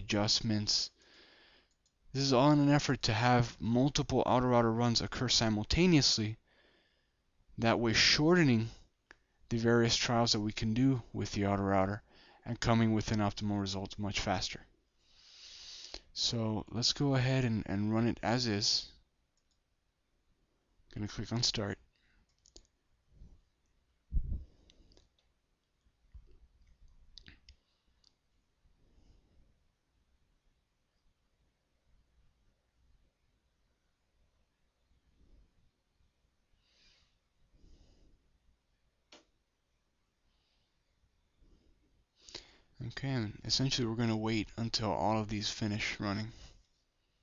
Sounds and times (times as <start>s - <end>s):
Speech: 0.0s - 1.0s, 2.1s - 6.4s, 7.6s - 8.8s, 9.5s - 14.7s, 16.2s - 19.0s, 20.9s - 21.8s, 42.8s - 46.5s
Clicking: 1.7s - 2.0s, 19.4s - 19.6s, 22.0s - 22.8s.